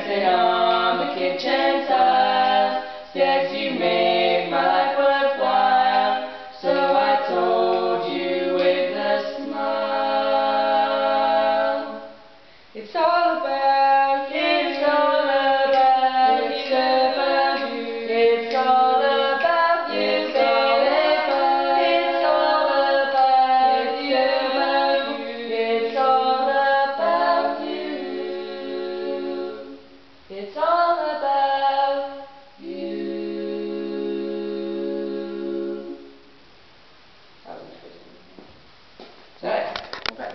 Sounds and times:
A capella: 0.0 - 36.5.

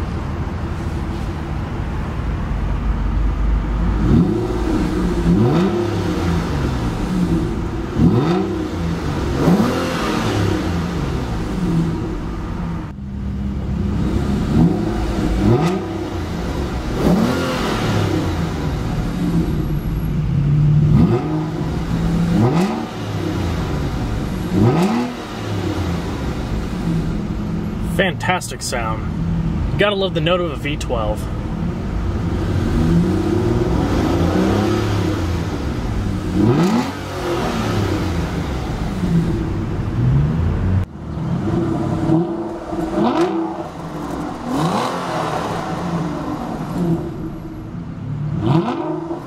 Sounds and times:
Car: 0.0 - 49.2
Outside, urban or manmade: 0.0 - 49.2
Accelerating, revving, vroom: 4.0 - 6.8, 8.0 - 11.3, 14.4 - 18.8, 20.9 - 23.9, 24.5 - 26.2, 32.4 - 35.7, 36.3 - 39.2, 41.4 - 47.1, 48.3 - 49.2.

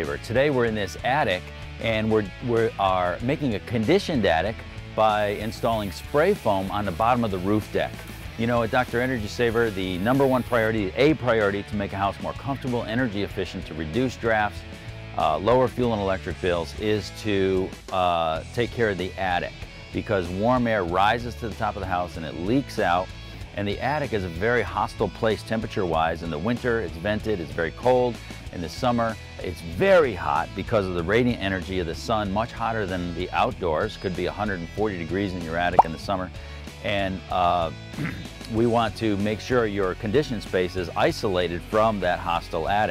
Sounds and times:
Speech: 0.0 - 14.6, 15.2 - 42.9
Music: 0.0 - 42.9.

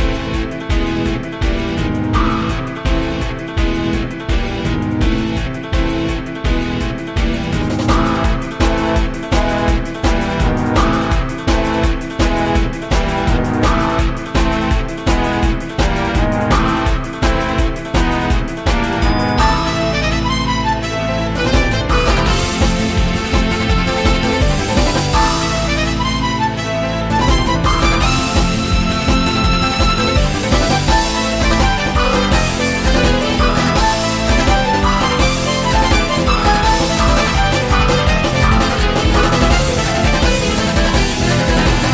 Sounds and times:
Music: 0.0 - 41.9.

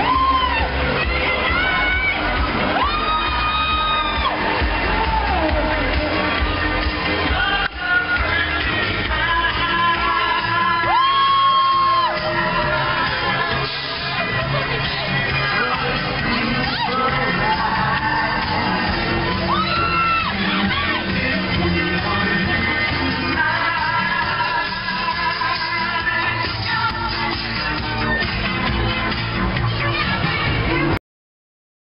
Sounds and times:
Music: 0.0 - 31.0.

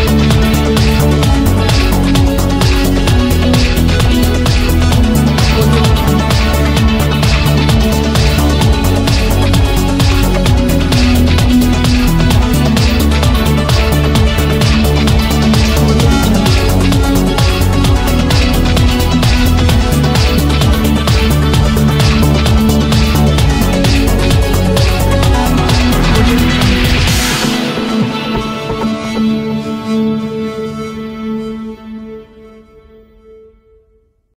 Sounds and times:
Electronic music: 0.0 - 33.3.

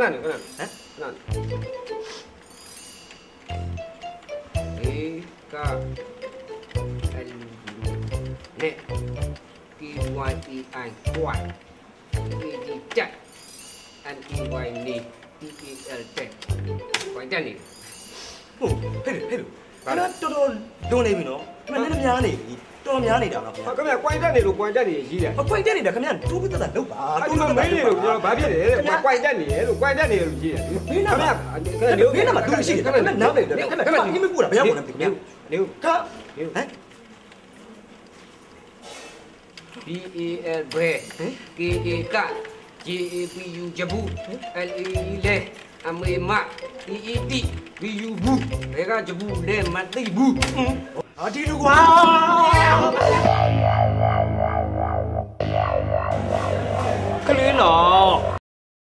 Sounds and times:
Music: 1.3 - 18.0, 18.6 - 33.8, 41.6 - 58.4
Speech: 39.8 - 53.3.

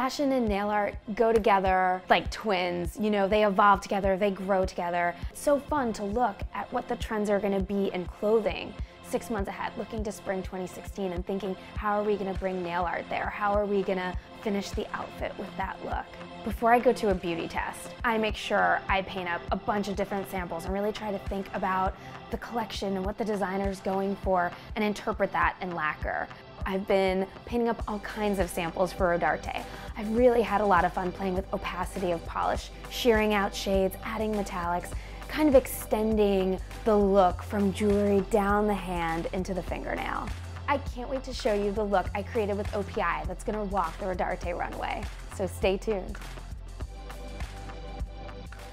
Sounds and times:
Speech: 0.0 - 46.2
Music: 0.0 - 48.7.

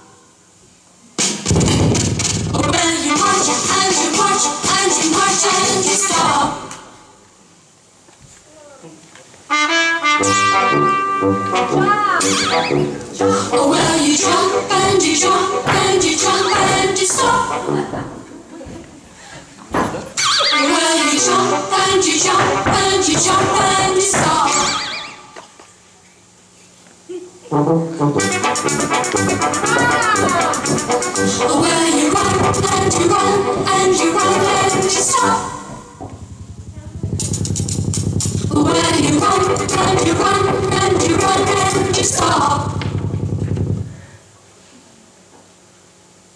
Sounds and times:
Music: 1.2 - 7.0, 9.5 - 18.1, 20.8 - 24.8, 27.4 - 36.0, 37.1 - 43.6.

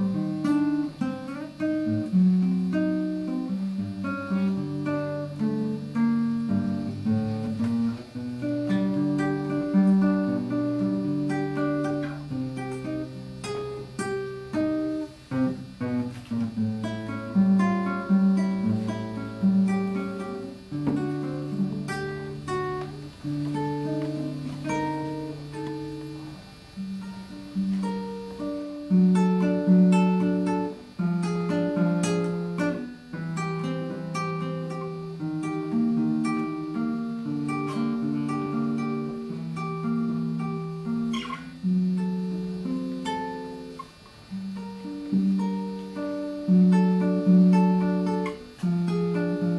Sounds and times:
Acoustic guitar: 0.0 - 49.5
Strum: 0.0 - 49.5.

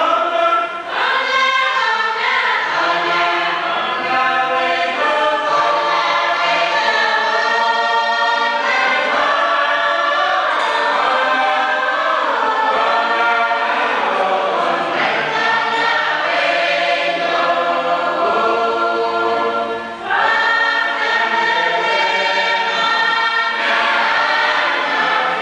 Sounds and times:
Music: 0.0 - 25.4.

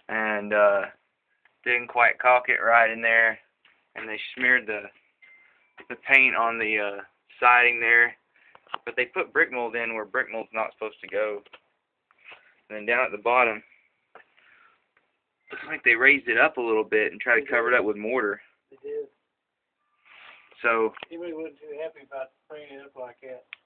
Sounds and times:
Speech: 0.0 - 1.0, 1.7 - 4.9, 5.8 - 8.2, 8.8 - 11.5, 12.7 - 13.7, 15.6 - 19.2, 20.6 - 23.5.

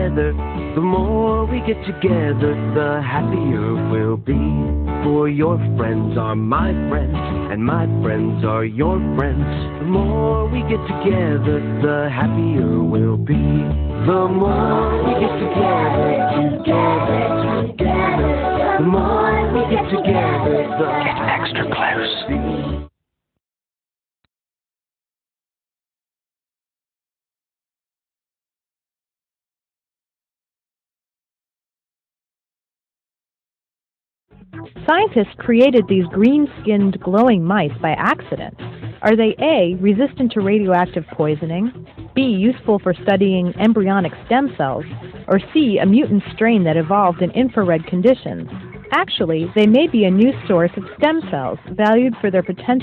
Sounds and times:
Music: 0.0 - 23.0, 34.3 - 52.8
Speech: 20.9 - 22.3, 34.9 - 52.8.

